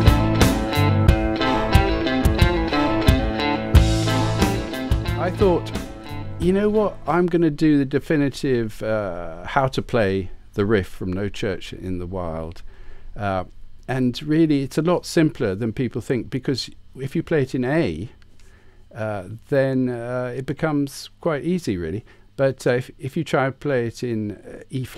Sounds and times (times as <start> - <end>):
Speech: 5.2 - 5.8, 6.4 - 12.6, 13.2 - 18.2, 18.9 - 24.9.